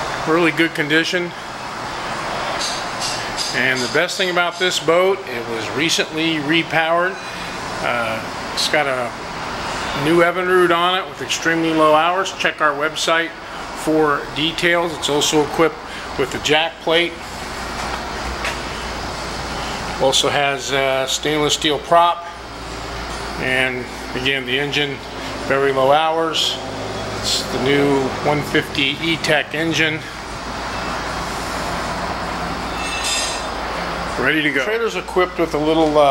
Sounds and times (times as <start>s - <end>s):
Speech: 0.2s - 1.4s, 3.5s - 7.2s, 7.8s - 9.2s, 10.0s - 17.2s, 20.0s - 22.4s, 23.4s - 26.6s, 27.2s - 30.1s, 34.2s - 36.1s.